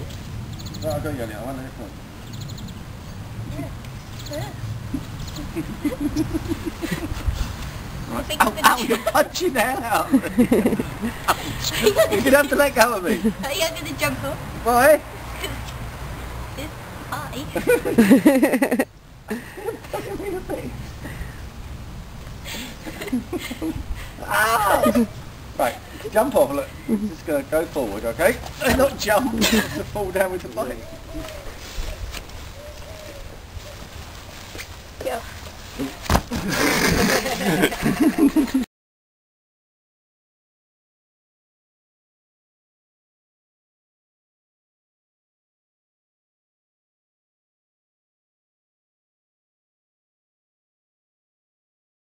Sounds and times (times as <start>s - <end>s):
Outside, rural or natural: 0.0s - 38.7s.